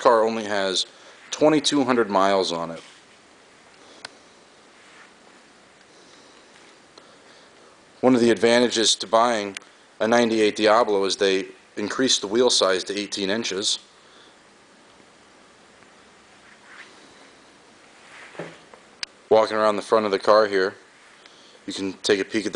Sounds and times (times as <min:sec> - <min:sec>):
Speech: 0:00.0 - 0:02.9, 0:08.0 - 0:13.9, 0:19.3 - 0:20.8, 0:21.6 - 0:22.5.